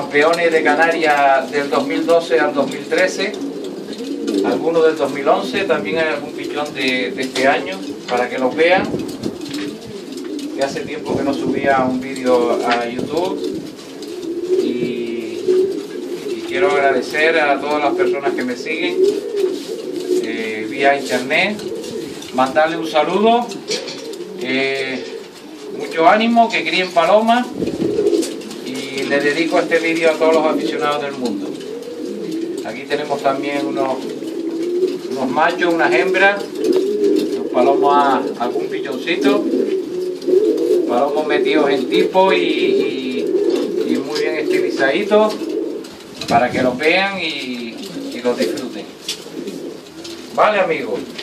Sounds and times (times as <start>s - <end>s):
Speech: 0.0s - 3.4s, 4.4s - 9.0s, 10.6s - 13.5s, 14.6s - 15.5s, 16.3s - 19.1s, 20.2s - 21.7s, 22.3s - 23.6s, 24.4s - 25.1s, 25.8s - 27.6s, 28.6s - 31.5s, 32.6s - 34.1s, 35.1s - 36.5s, 37.5s - 39.5s, 40.9s - 45.4s, 46.2s - 48.9s, 50.4s - 51.2s
Pigeon, dove: 0.0s - 51.2s.